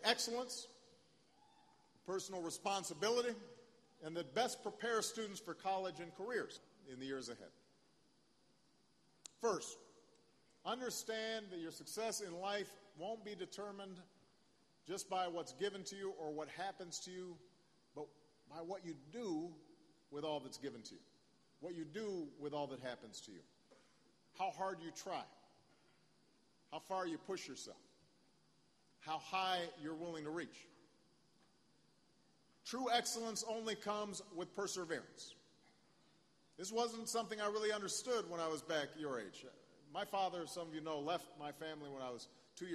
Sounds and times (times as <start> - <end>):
Male speech, man speaking: 0.0 - 0.8, 2.0 - 7.6, 9.4 - 9.8, 10.6 - 14.1, 14.8 - 17.4, 18.0 - 21.0, 21.6 - 23.5, 24.4 - 25.4, 26.7 - 27.9, 29.0 - 30.7, 32.6 - 35.4, 36.6 - 42.7
Narration, monologue: 0.0 - 42.7.